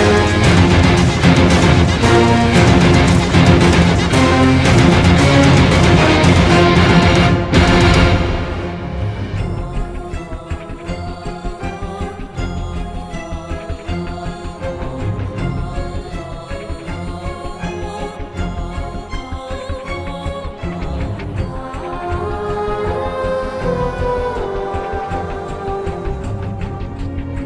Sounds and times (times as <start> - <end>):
Background music: 0.0 - 27.4
Sad music: 0.0 - 27.4
Soundtrack music: 0.0 - 27.4.